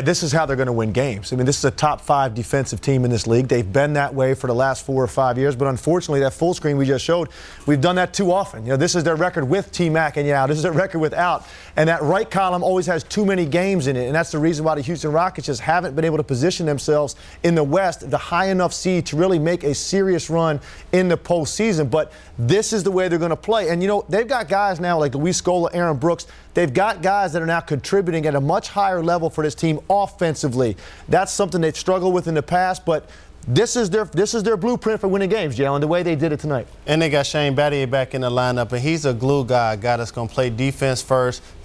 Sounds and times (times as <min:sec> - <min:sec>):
Speech: 0:00.0 - 0:41.4.